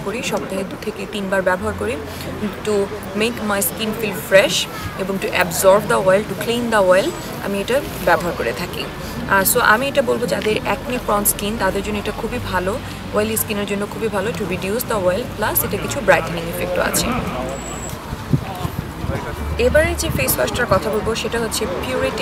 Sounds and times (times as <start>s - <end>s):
Speech: 0.0s - 17.7s, 18.4s - 22.2s.